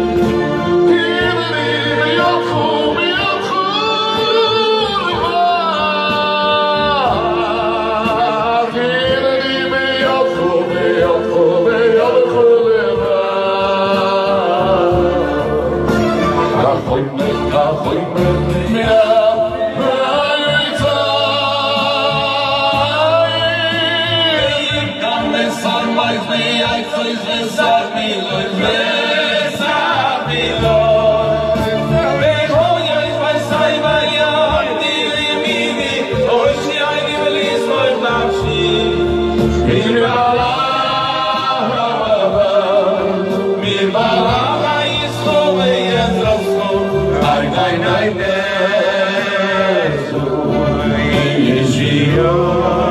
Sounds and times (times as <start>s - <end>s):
Male singing: 0.0s - 52.9s
Music: 0.0s - 52.9s.